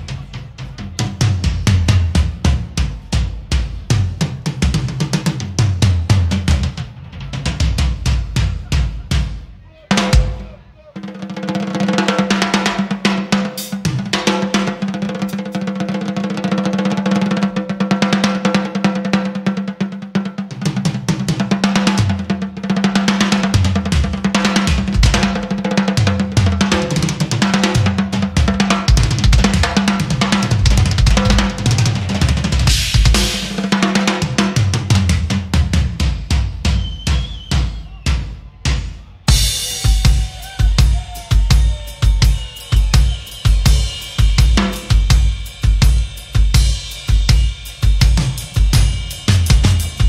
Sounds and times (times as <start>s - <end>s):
Music: 0.0s - 50.0s.